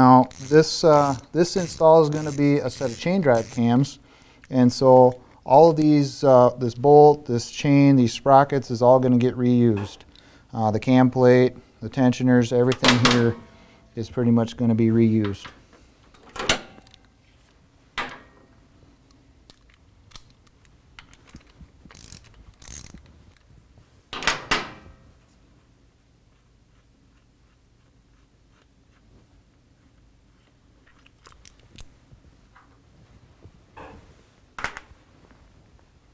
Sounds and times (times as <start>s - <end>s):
Speech: 0.0s - 13.4s, 14.0s - 15.6s.